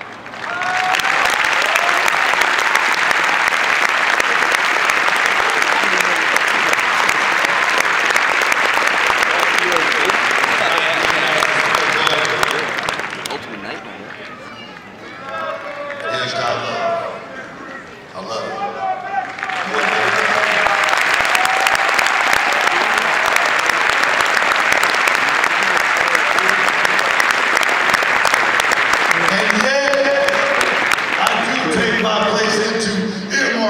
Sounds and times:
Male speech, man speaking: 10.6 - 12.7, 13.3 - 14.4, 15.3 - 20.6, 29.2 - 33.7.

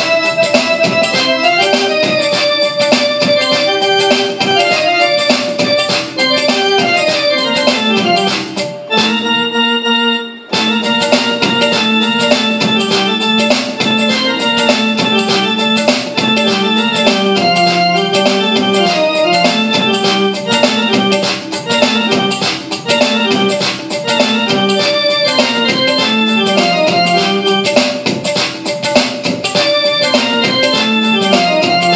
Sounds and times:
Electric piano: 0.0 - 31.9.

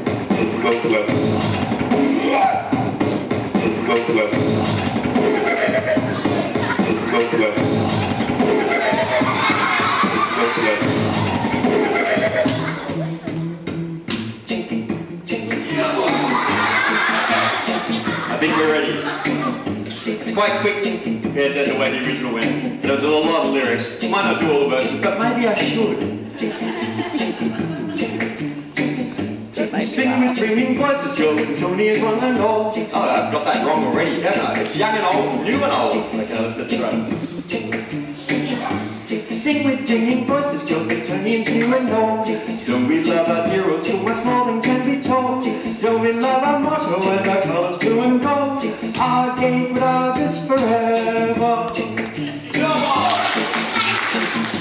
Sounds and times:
Beatboxing: 0.0 - 54.6.

